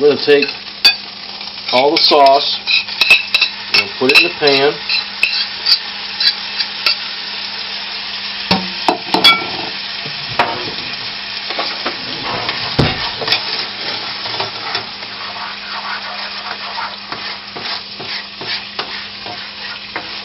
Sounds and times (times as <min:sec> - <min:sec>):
Frying (food): 0:00.0 - 0:20.2
Stir: 0:14.6 - 0:20.2.